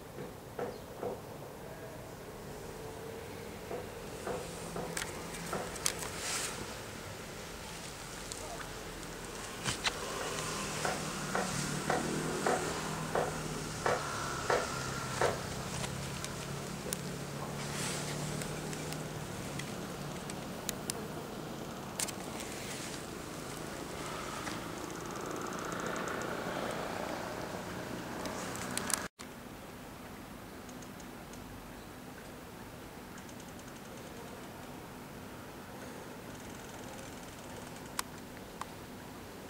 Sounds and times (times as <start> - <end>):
Vehicle: 0.0 - 29.3.